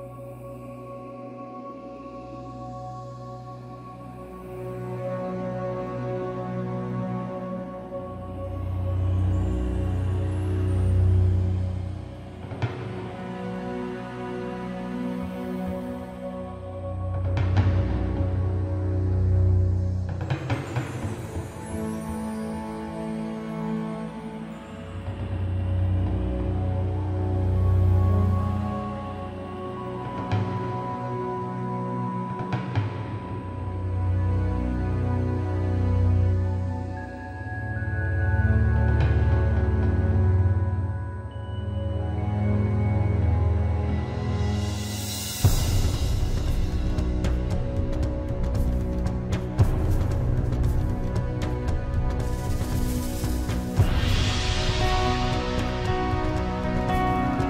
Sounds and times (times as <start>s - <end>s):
Music: 0.0s - 57.5s.